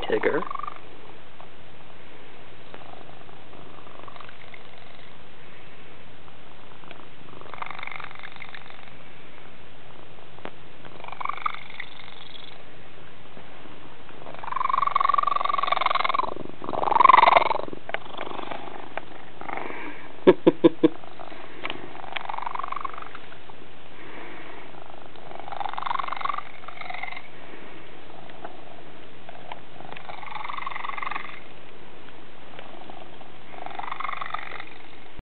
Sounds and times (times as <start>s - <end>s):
Cat: 6.8s - 8.9s, 14.3s - 20.0s, 32.6s - 35.0s.